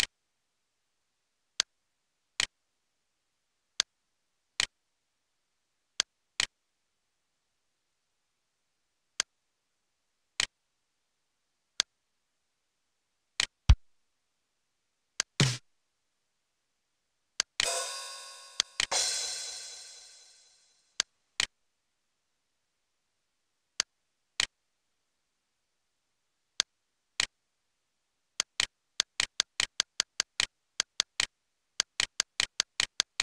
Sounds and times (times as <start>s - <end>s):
Musical instrument: 17.6s - 20.6s.